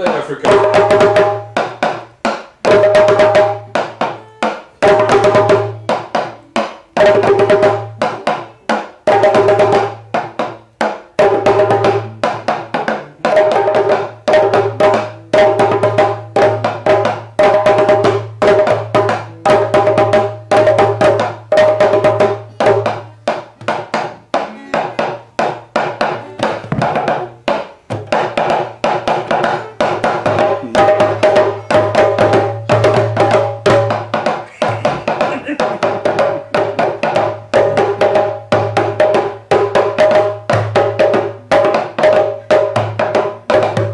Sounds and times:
Wood block: 0.0 - 43.9.

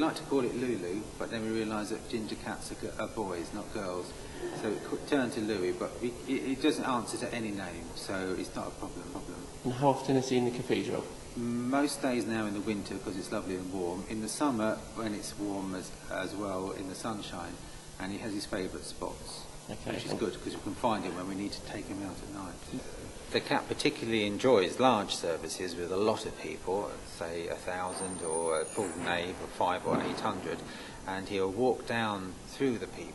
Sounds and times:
Speech: 0.0 - 33.1
Hiss: 22.2 - 31.5.

